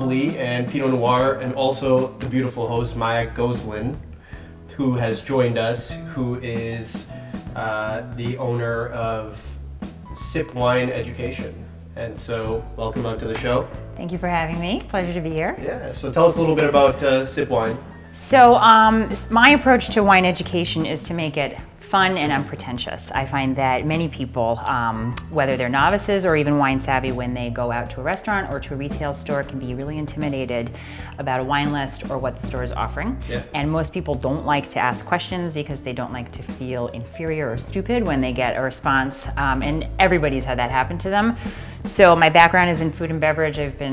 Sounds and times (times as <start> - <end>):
Music: 0.0 - 43.9
Speech: 10.2 - 43.9.